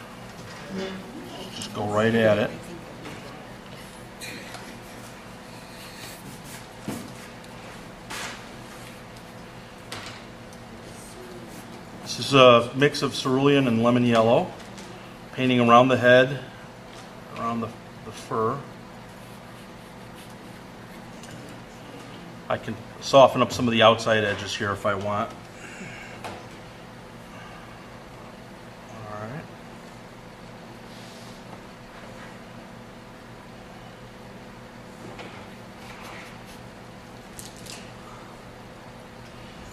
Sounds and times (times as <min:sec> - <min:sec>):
Speech: 0:12.1 - 0:14.5, 0:15.4 - 0:16.5, 0:17.3 - 0:18.7, 0:22.5 - 0:25.4.